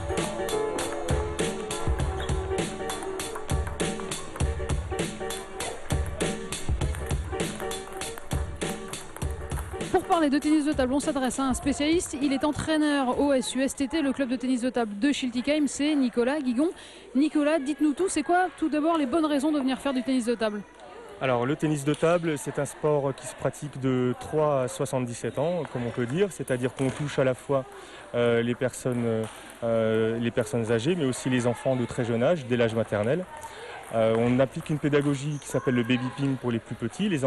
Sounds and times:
Music: 0.0 - 12.0.

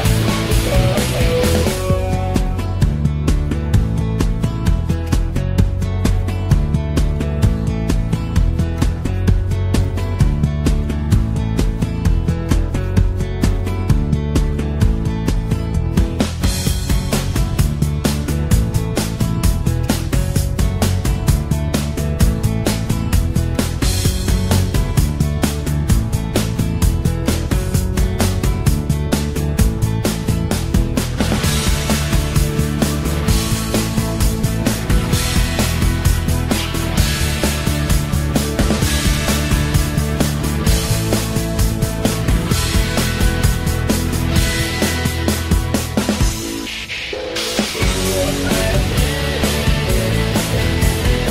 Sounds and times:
Music: 0.0 - 51.3.

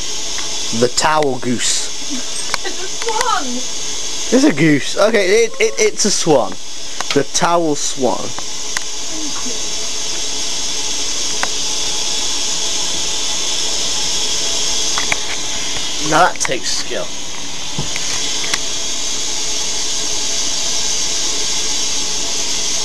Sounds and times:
Speech: 0.8 - 1.9, 4.4 - 8.3, 16.0 - 17.1.

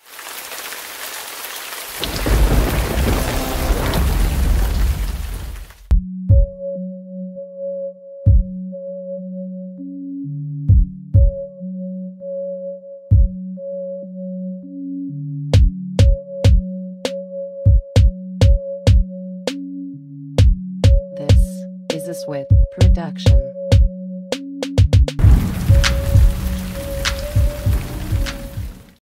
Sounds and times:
Music: 2.2 - 4.6, 5.8 - 29.0
Speech: 21.2 - 23.6.

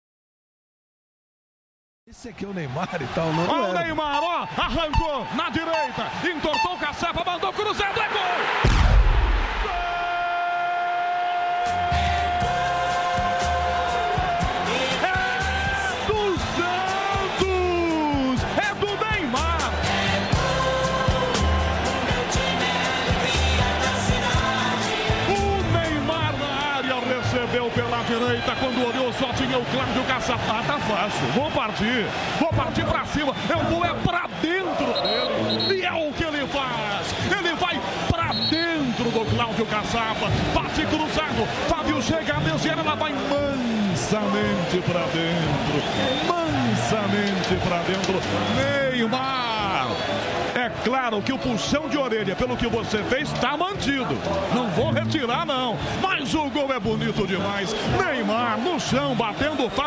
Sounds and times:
Music: 3.1 - 7.2, 11.1 - 59.8
Speech: 25.3 - 45.6, 46.3 - 50.0, 50.6 - 59.8.

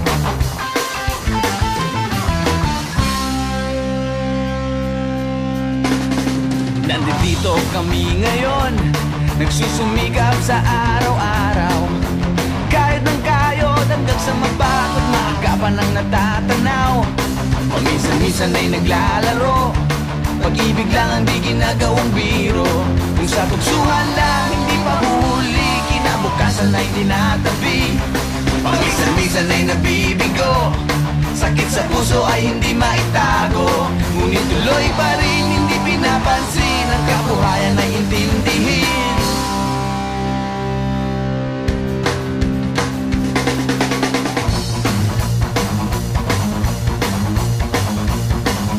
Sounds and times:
Music: 0.0 - 48.7.

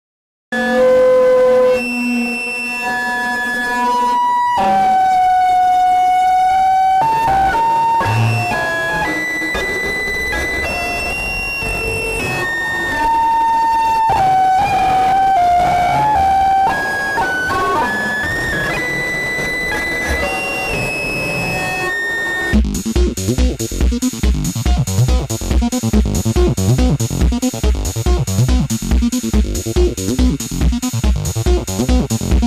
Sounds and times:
Music: 0.5 - 32.4.

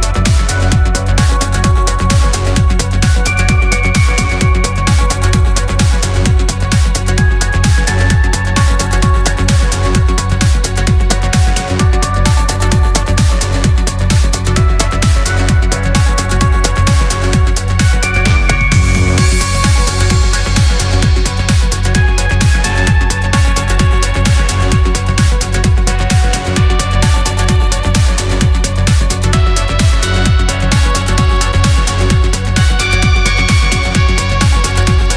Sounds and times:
Trance music: 0.0 - 35.1.

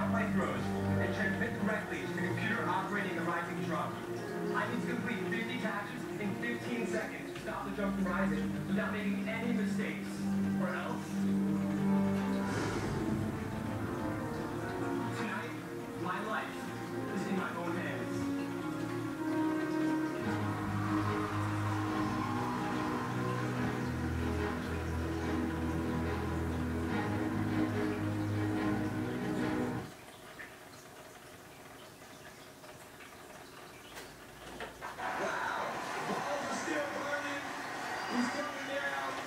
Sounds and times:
Speech: 0.0 - 11.2, 15.1 - 18.4, 35.1 - 39.2
Music: 0.0 - 29.9, 35.5 - 39.2
Sink (filling or washing): 0.0 - 35.8
Bathtub (filling or washing): 0.0 - 39.2.

